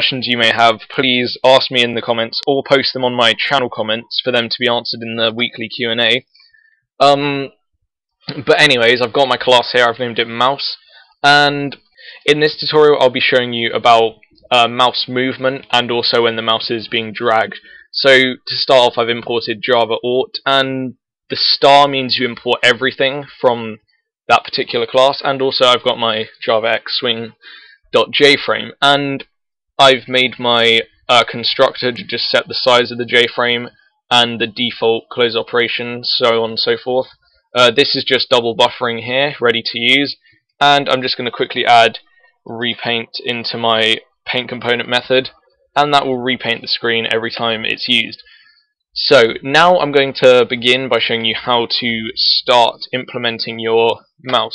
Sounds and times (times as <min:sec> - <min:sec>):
Speech: 0:00.0 - 0:06.3, 0:07.0 - 0:07.5, 0:08.3 - 0:48.4, 0:49.0 - 0:54.5.